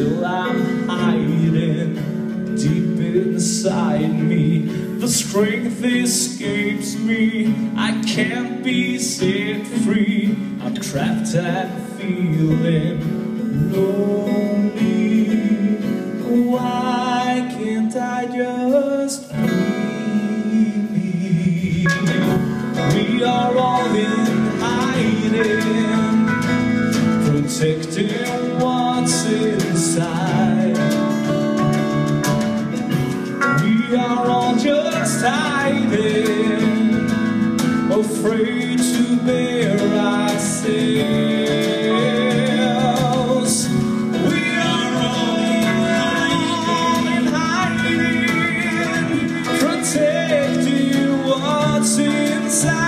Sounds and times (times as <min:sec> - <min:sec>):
Music: 0:00.0 - 0:52.8
Singing: 0:37.9 - 0:52.8.